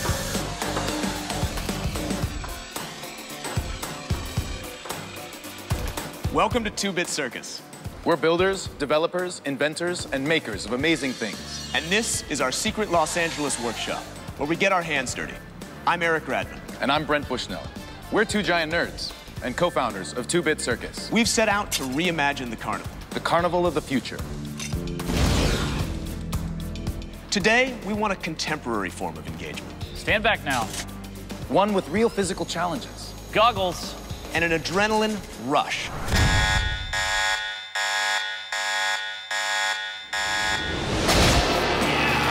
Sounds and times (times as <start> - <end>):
Music: 0.0 - 36.2, 40.9 - 42.3
Speech: 6.4 - 24.2, 31.5 - 35.9.